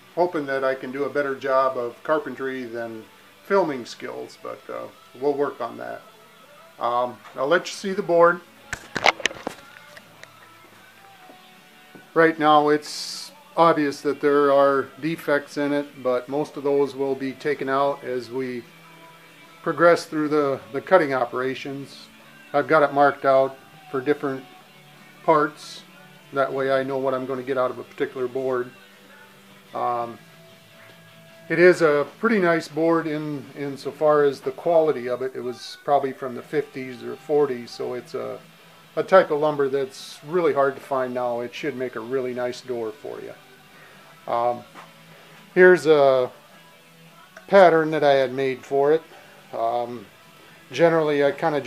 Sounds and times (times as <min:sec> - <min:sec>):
Music: 0:00.0 - 0:51.6
Speech: 0:00.2 - 0:06.1, 0:06.8 - 0:08.5, 0:12.1 - 0:18.7, 0:19.6 - 0:24.5, 0:25.2 - 0:28.8, 0:29.8 - 0:30.2, 0:31.5 - 0:38.4, 0:39.0 - 0:43.4, 0:44.3 - 0:44.7, 0:45.6 - 0:46.4, 0:47.4 - 0:50.1, 0:50.7 - 0:51.6.